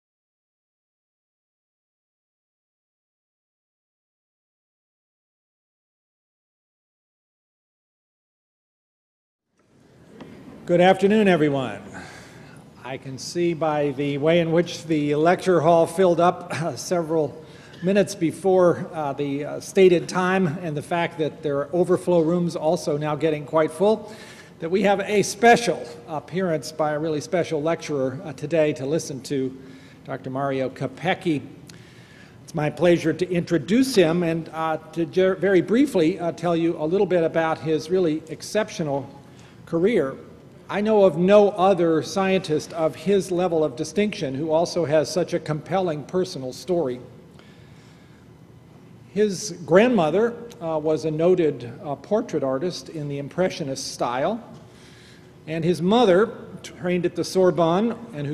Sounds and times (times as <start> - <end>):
Speech: 10.6 - 12.1, 12.8 - 31.6, 32.5 - 47.1, 49.1 - 54.6, 55.5 - 58.3.